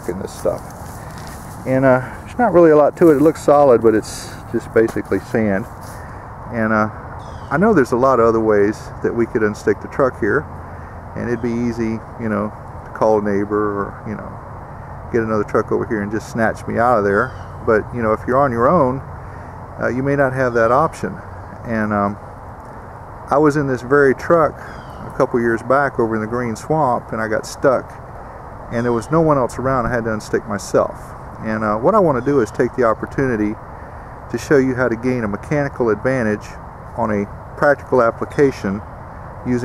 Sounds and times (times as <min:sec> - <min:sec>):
Speech: 0:00.0 - 0:00.6, 0:01.6 - 0:05.7, 0:06.5 - 0:10.5, 0:11.2 - 0:14.4, 0:15.1 - 0:19.0, 0:19.8 - 0:22.2, 0:23.3 - 0:28.0, 0:28.7 - 0:33.6, 0:34.3 - 0:38.8.